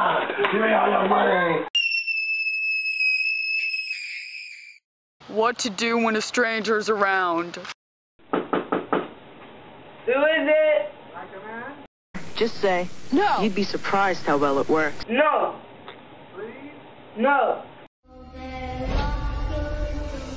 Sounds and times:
Speech: 0:05.3 - 0:07.7, 0:12.4 - 0:15.6
Knock: 0:08.3 - 0:09.2.

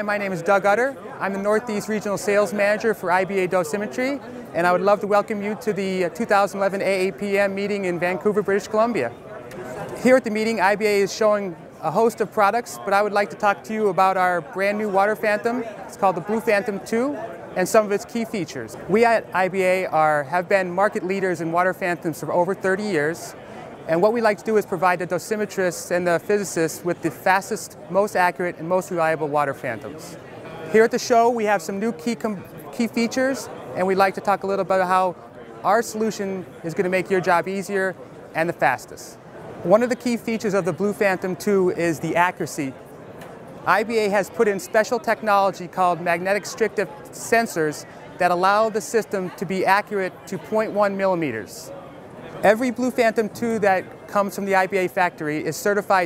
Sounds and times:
Speech: 0:00.0 - 0:42.8, 0:43.6 - 0:56.0.

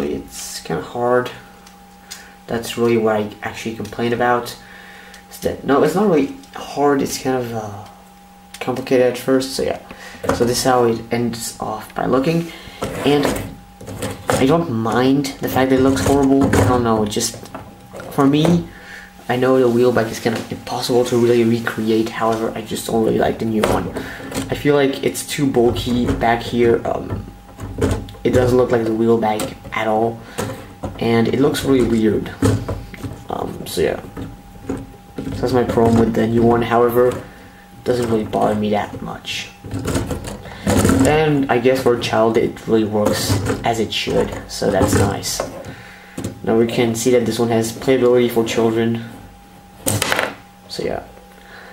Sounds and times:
Speech: 0:00.0 - 0:01.4, 0:02.5 - 0:04.6, 0:05.3 - 0:08.0, 0:08.6 - 0:13.6, 0:14.3 - 0:17.4, 0:18.1 - 0:18.7, 0:19.3 - 0:27.3, 0:28.2 - 0:30.2, 0:31.0 - 0:32.6, 0:33.3 - 0:34.1, 0:35.2 - 0:39.6, 0:40.9 - 0:45.6, 0:46.4 - 0:49.2, 0:50.7 - 0:51.2
Inside, small room: 0:00.0 - 0:51.7.

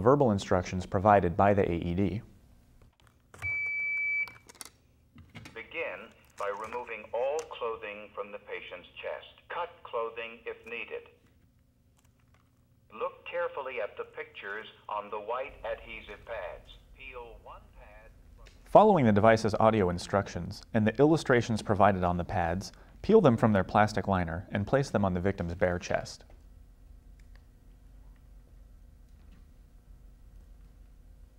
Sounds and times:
Speech: 0:00.0 - 0:02.3, 0:05.5 - 0:11.2, 0:12.9 - 0:18.1, 0:18.7 - 0:26.3
Beep, bleep: 0:03.4 - 0:04.4.

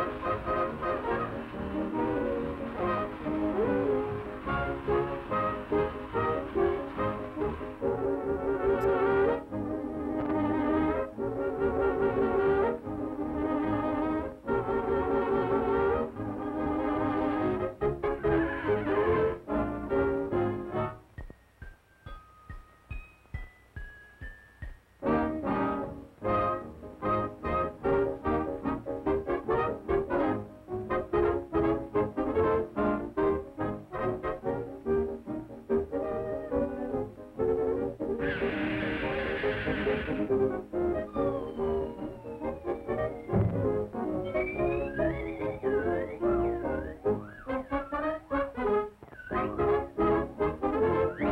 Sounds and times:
French horn: 0:00.0 - 0:21.1, 0:25.0 - 0:51.3.

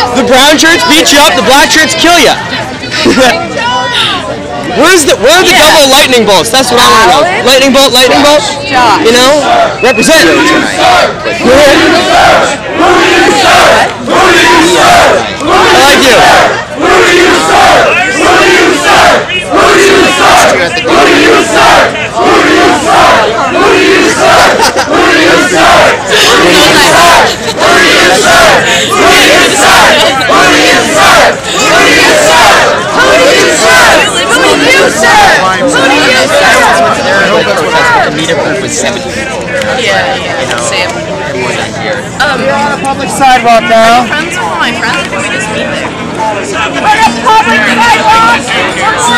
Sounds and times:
Speech: 0:00.0 - 0:12.0.

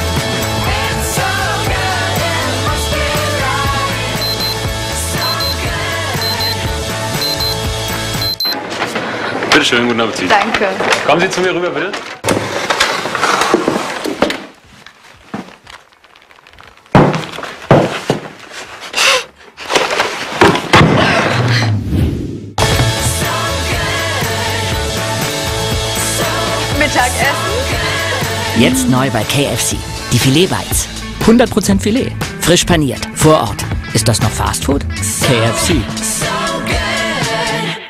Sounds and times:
Music: 0:00.0 - 0:08.6, 0:22.6 - 0:37.8
Speech: 0:28.6 - 0:35.9.

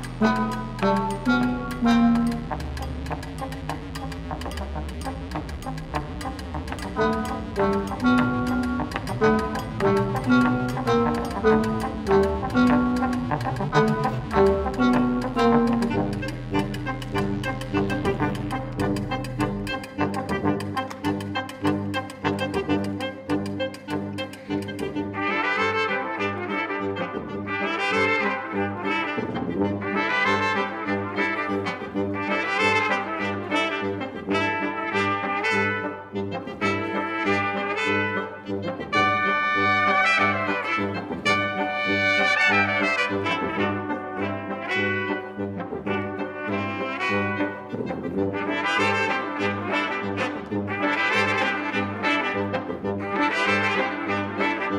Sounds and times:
Trombone: 0:00.0 - 0:24.2, 0:24.9 - 0:54.7
Jazz: 0:00.0 - 0:54.7
Trumpet: 0:00.0 - 0:54.7.

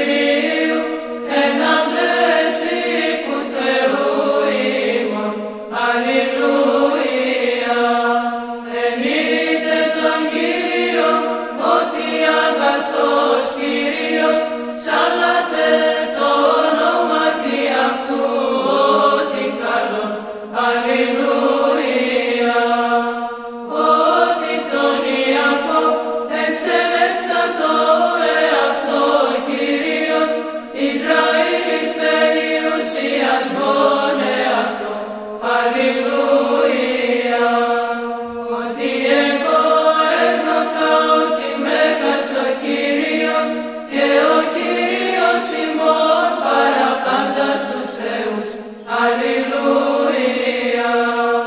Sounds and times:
Mantra: 0:00.0 - 0:51.4.

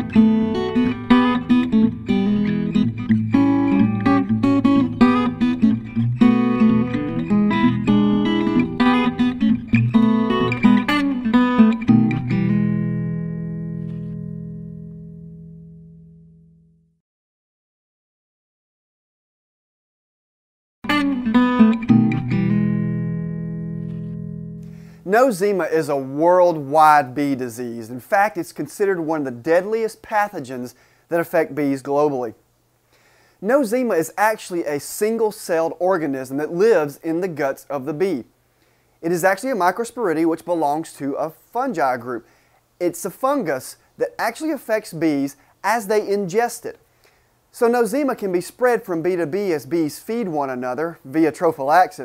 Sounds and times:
Acoustic guitar: 0:00.0 - 0:16.5, 0:20.8 - 0:25.2.

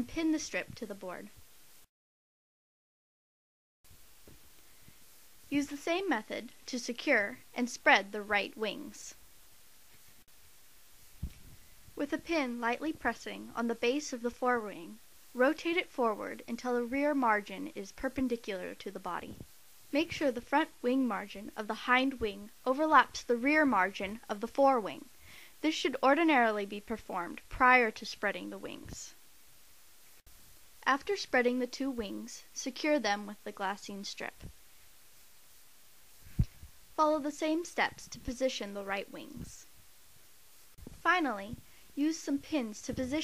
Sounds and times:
Speech: 0:00.0 - 0:01.4, 0:05.5 - 0:09.2, 0:12.0 - 0:29.2, 0:30.8 - 0:34.5, 0:37.0 - 0:39.7, 0:41.0 - 0:43.2.

